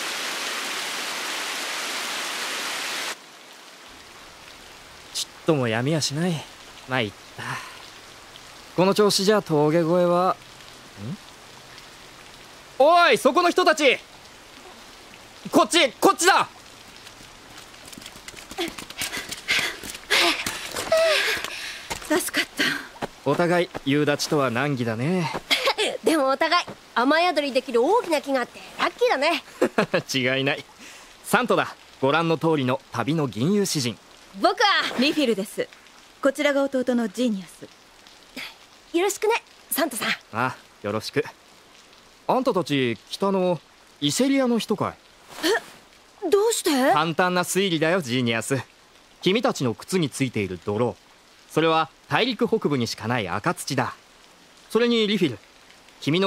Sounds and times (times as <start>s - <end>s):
Raindrop: 0.0s - 56.2s.